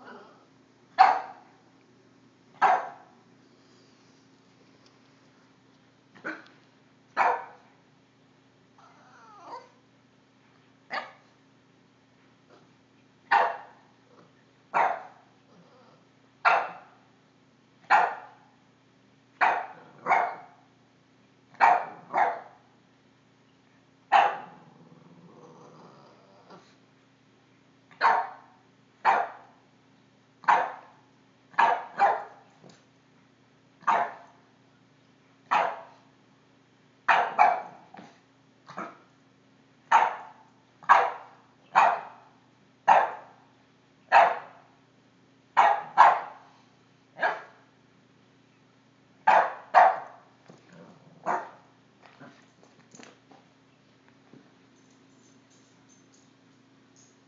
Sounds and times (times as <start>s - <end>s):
Bark: 1.0s - 1.5s, 2.6s - 3.2s, 7.2s - 7.7s, 10.9s - 11.3s, 13.3s - 13.8s, 14.7s - 15.3s, 16.4s - 17.1s, 17.9s - 18.5s, 19.4s - 20.7s, 21.6s - 22.6s, 24.1s - 24.6s, 27.9s - 29.6s, 30.4s - 32.5s, 33.8s - 34.4s, 35.5s - 36.1s, 37.1s - 39.1s, 39.9s - 43.4s, 44.1s - 44.7s, 45.6s - 46.5s, 47.2s - 47.6s, 49.3s - 50.3s, 51.2s - 51.6s.